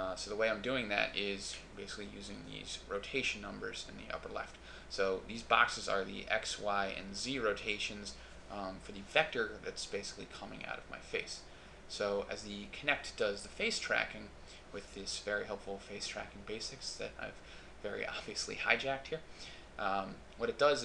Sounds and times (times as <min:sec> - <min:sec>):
Speech: 0:00.0 - 0:20.8.